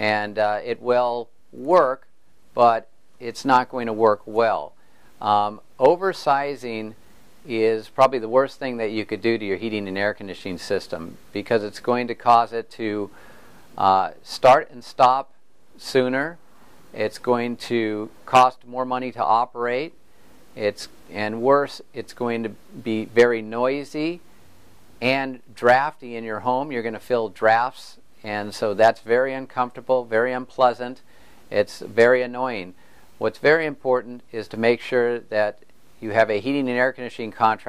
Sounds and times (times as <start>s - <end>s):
Speech: 0.0s - 13.1s, 13.8s - 16.4s, 17.0s - 20.0s, 20.6s - 24.2s, 25.0s - 37.6s.